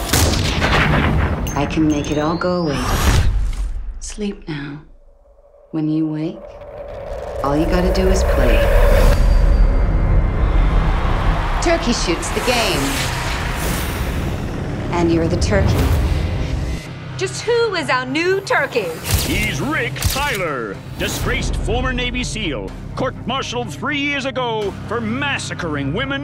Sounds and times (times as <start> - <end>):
Music: 0.0 - 3.9, 7.5 - 26.2.